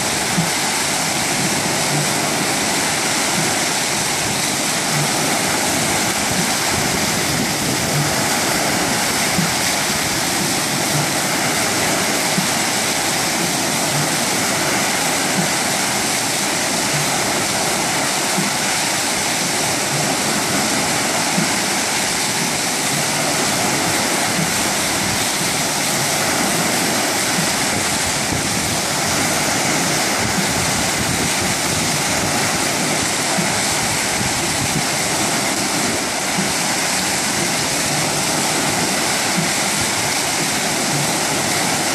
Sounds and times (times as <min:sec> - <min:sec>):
Stream: 0:00.0 - 0:41.9
Waterfall: 0:00.0 - 0:41.9.